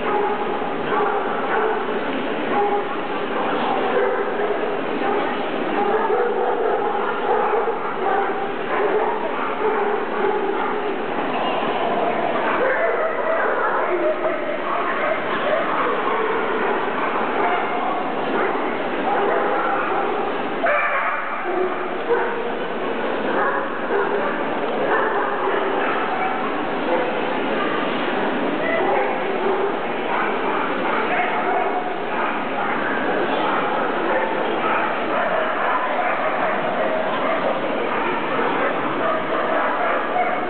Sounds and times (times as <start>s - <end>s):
Bow-wow: 0.0s - 11.0s, 12.1s - 22.6s, 23.3s - 27.9s, 28.6s - 40.5s.